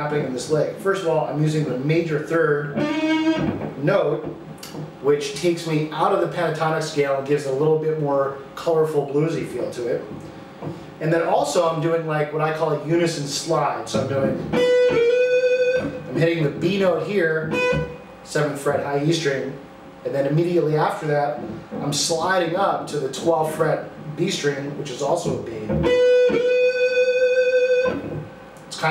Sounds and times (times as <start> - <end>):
Speech: 0.0 - 2.8, 3.8 - 10.2, 11.0 - 14.5, 16.1 - 17.5, 18.2 - 25.8.